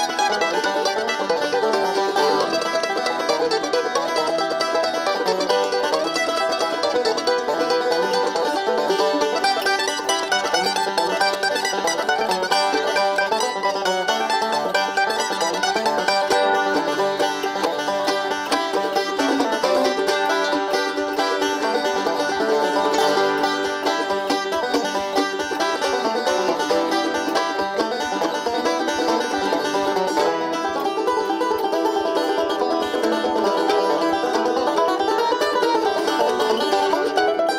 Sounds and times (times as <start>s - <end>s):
Banjo: 0.0s - 37.5s
Mandolin: 0.0s - 37.5s.